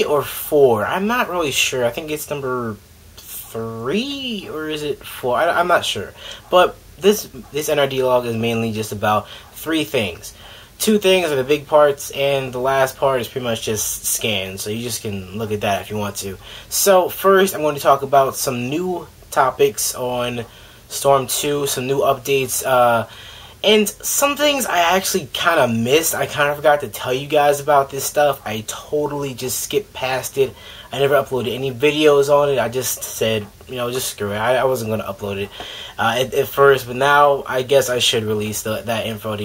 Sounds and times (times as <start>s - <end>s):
Speech: 0.0s - 39.4s.